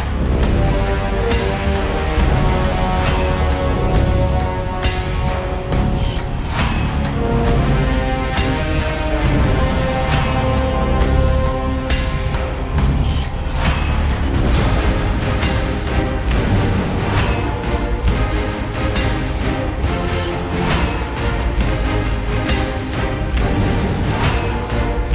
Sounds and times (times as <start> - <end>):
Music: 0.0 - 25.1.